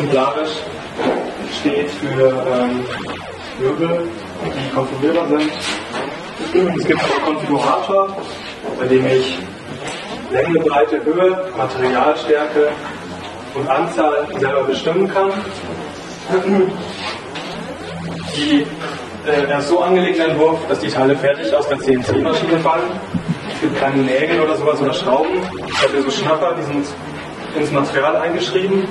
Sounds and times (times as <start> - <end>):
Speech: 0.0 - 0.8, 1.4 - 9.6, 10.3 - 16.9, 18.3 - 28.9.